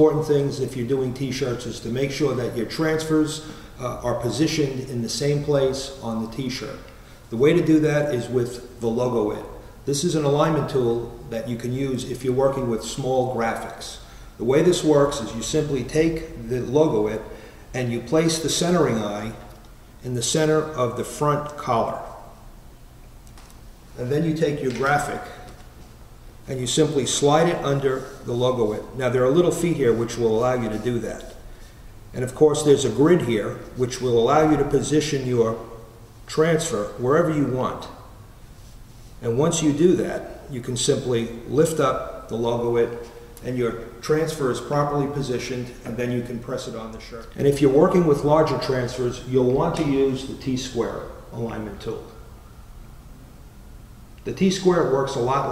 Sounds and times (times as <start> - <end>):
Speech: 0.0 - 22.3, 24.0 - 25.5, 26.5 - 31.4, 32.1 - 35.7, 36.3 - 38.0, 39.2 - 52.2, 54.2 - 55.5.